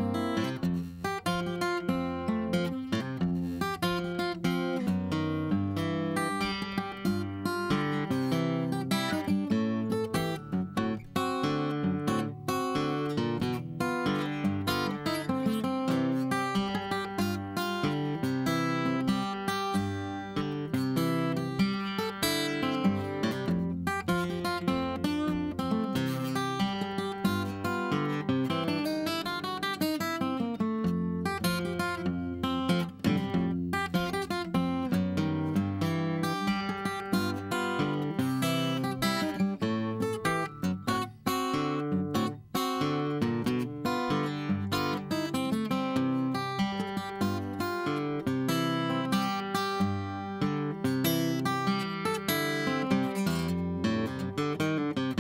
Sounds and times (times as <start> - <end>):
Music: 0.0 - 55.2.